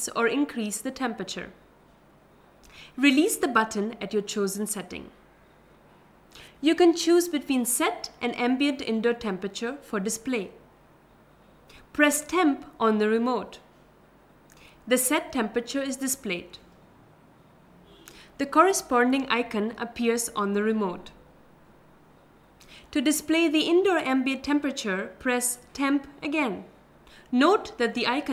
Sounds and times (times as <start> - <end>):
Speech: 0.0 - 1.6, 3.0 - 5.2, 6.6 - 10.6, 12.0 - 13.6, 14.9 - 16.6, 18.4 - 21.2, 22.9 - 26.7, 27.3 - 28.3.